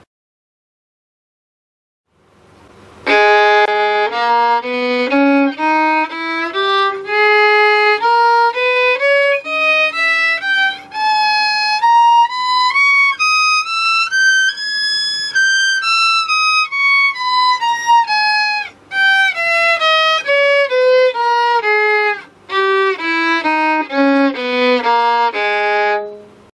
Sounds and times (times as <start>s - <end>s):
Music: 3.0s - 26.5s.